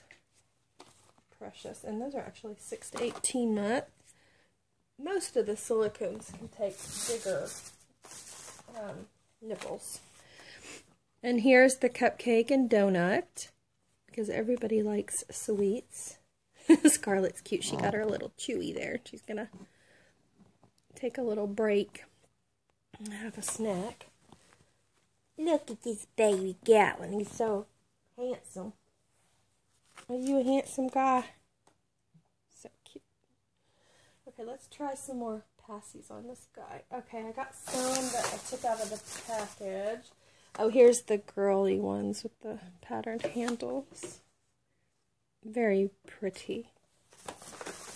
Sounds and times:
Speech: 1.3 - 4.0, 5.0 - 7.7, 8.7 - 10.1, 11.2 - 16.2, 16.8 - 19.6, 20.9 - 22.2, 23.0 - 24.1, 25.4 - 28.8, 30.1 - 31.4, 34.3 - 44.2, 45.4 - 46.8.

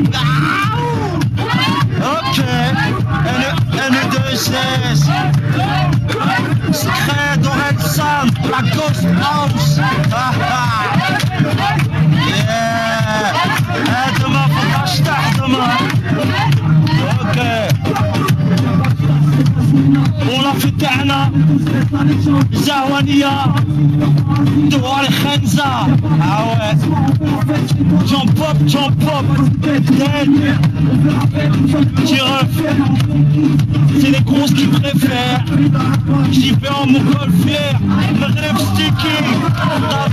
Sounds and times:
Music: 0.0 - 40.1.

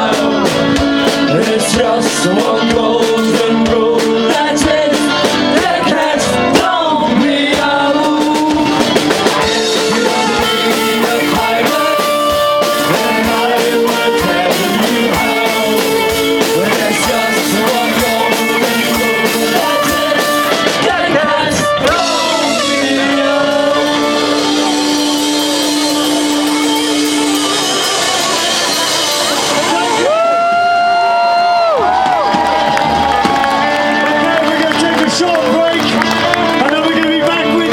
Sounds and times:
Singing: 0.0 - 30.1
Drum: 0.0 - 30.8, 31.8 - 37.7
Crowd: 0.0 - 37.7
Drum kit: 0.0 - 37.7.

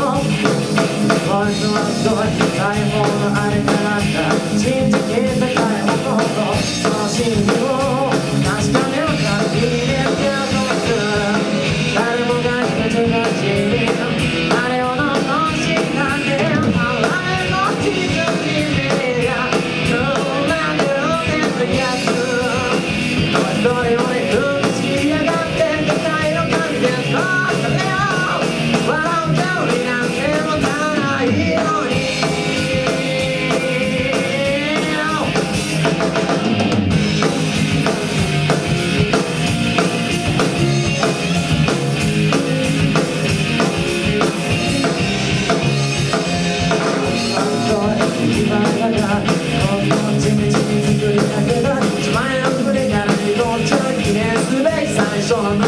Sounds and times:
Music: 0.0 - 55.6.

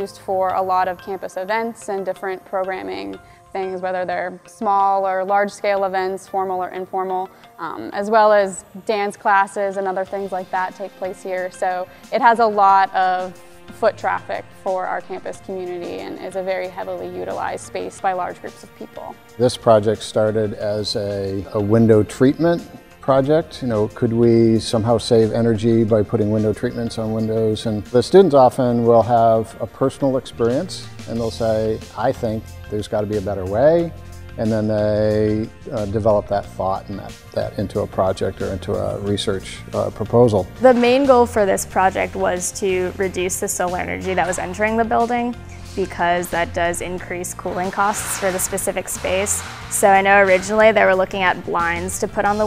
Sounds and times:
Music: 0.0 - 52.4
Speech: 13.8 - 52.4.

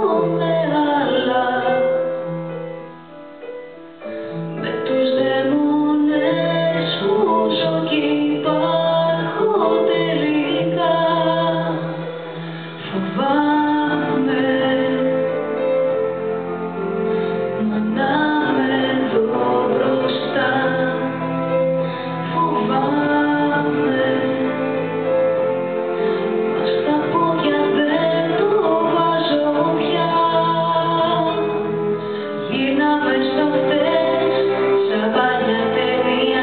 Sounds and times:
Female singing: 0.0 - 2.1, 4.6 - 12.1, 12.9 - 15.6, 17.6 - 21.6, 22.3 - 24.8, 26.6 - 31.6, 32.5 - 36.4
Music: 0.0 - 36.4.

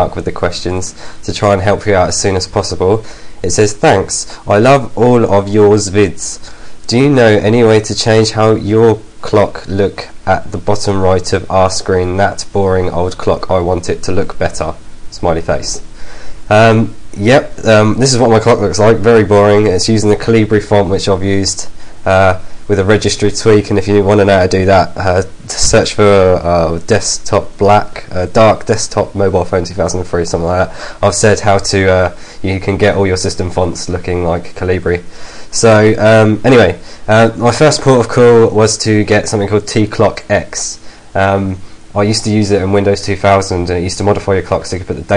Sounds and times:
Speech: 0.0 - 15.9, 16.5 - 45.1.

